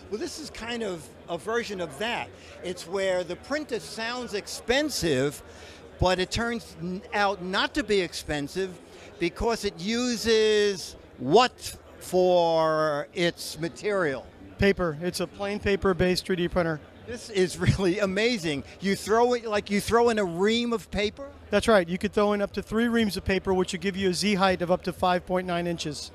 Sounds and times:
Speech: 0.0 - 26.1.

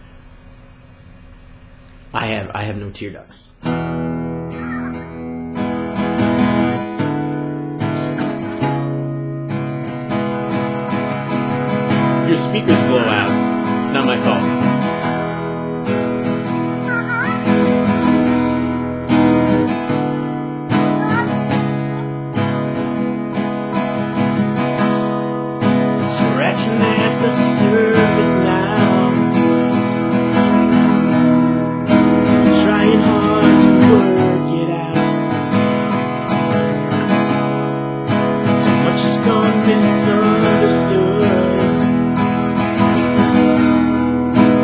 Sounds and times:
Speech: 2.2 - 3.6, 12.3 - 14.5
Strum: 3.6 - 44.6.

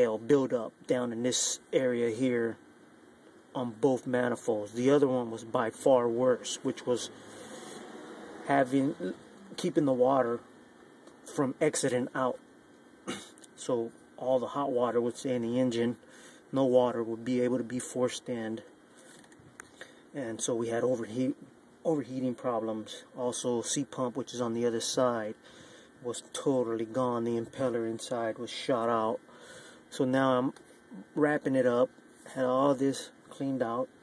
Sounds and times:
Speech: 0.0 - 2.6, 3.5 - 7.2, 8.4 - 10.4, 11.2 - 12.4, 13.1 - 18.7, 20.1 - 25.4, 26.0 - 29.3, 29.9 - 34.0.

